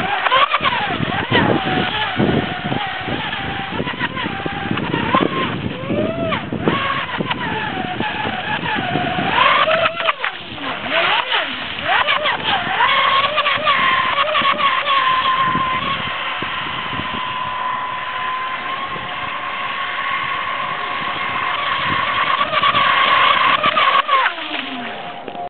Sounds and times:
Motorboat, speedboat: 0.0 - 25.5.

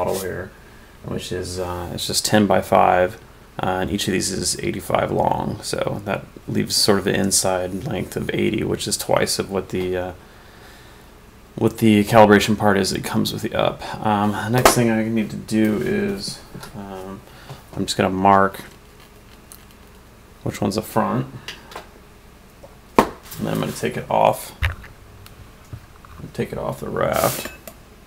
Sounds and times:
Speech: 0.0 - 10.2, 11.6 - 17.2, 17.8 - 18.7, 20.4 - 21.4, 23.4 - 24.6, 26.2 - 27.6.

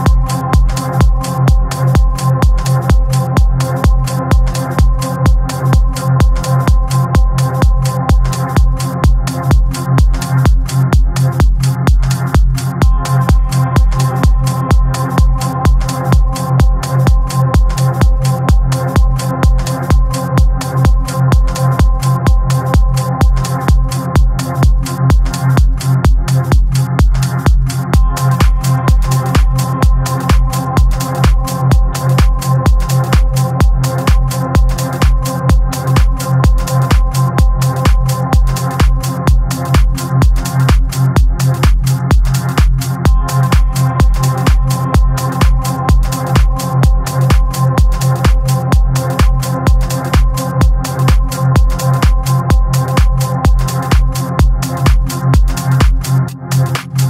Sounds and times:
Music: 0.0 - 57.0.

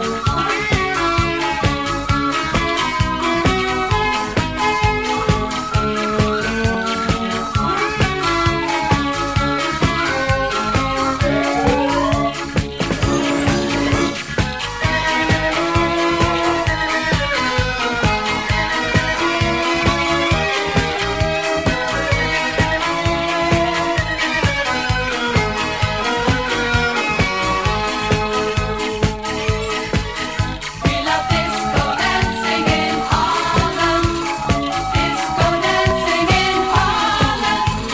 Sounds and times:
Music: 0.0 - 37.9.

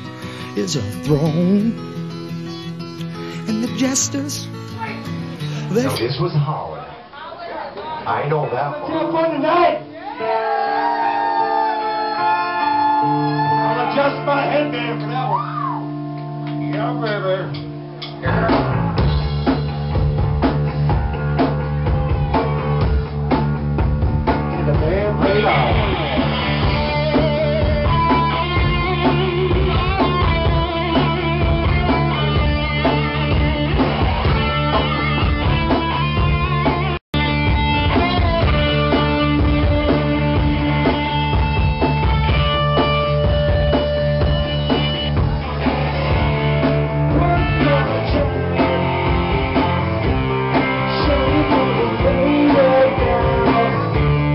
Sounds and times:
Music: 0.0 - 6.7, 8.9 - 54.3.

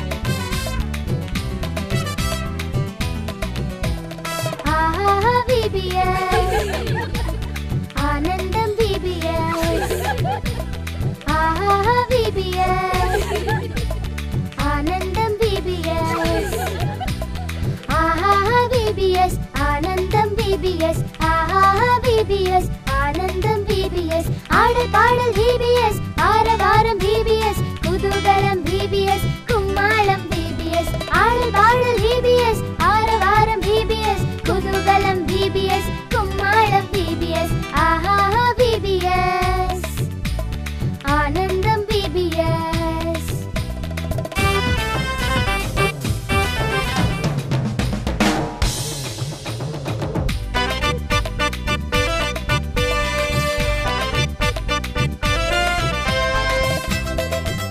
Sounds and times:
Music: 0.0 - 57.7.

